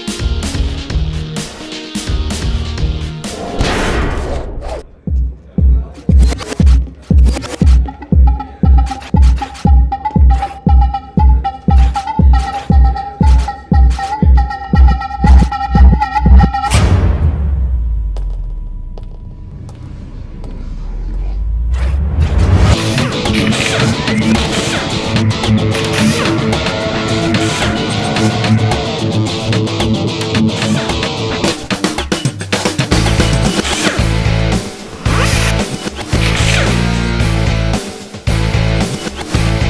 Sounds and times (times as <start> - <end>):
Music: 0.0 - 19.6, 22.4 - 39.7.